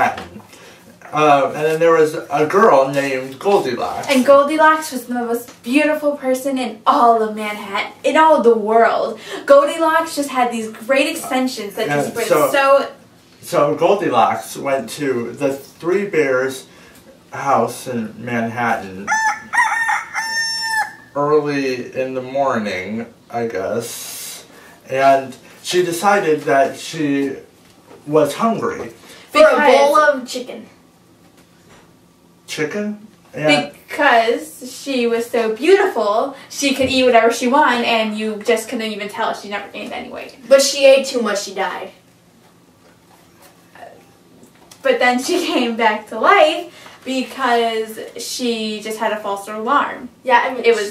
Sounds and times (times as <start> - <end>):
Crowing, cock-a-doodle-doo: 19.1 - 21.2.